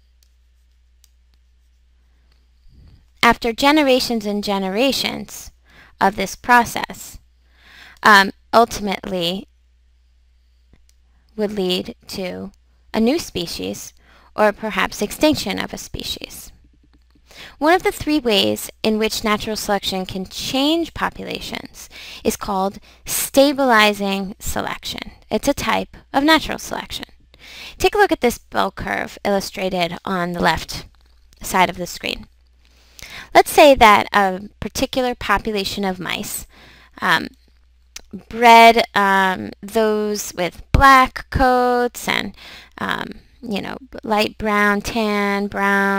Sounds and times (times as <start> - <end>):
Speech: 3.2 - 7.2, 8.0 - 9.5, 11.4 - 16.5, 17.6 - 27.1, 27.8 - 32.3, 33.3 - 37.4, 38.0 - 45.9.